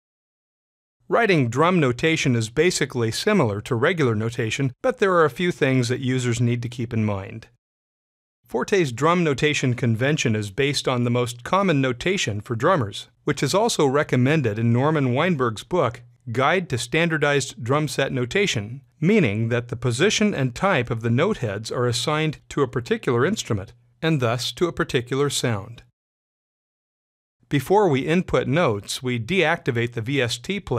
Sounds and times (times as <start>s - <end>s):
Speech: 1.1s - 7.6s, 8.5s - 25.9s, 27.5s - 30.7s.